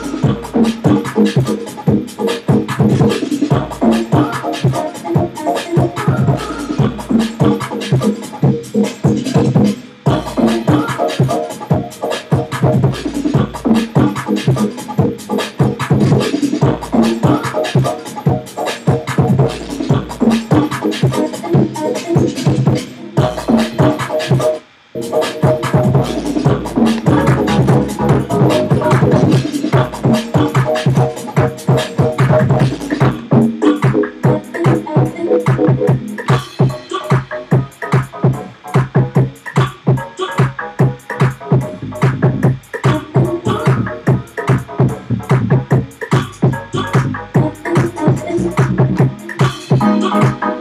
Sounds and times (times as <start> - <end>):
Scratching (performance technique): 0.0 - 50.5
Electronic music: 0.0 - 50.6.